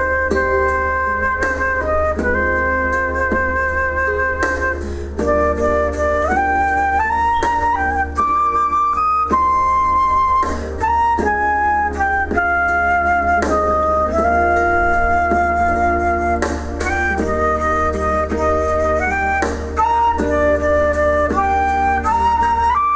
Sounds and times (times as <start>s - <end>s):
Flute: 0.0s - 22.9s.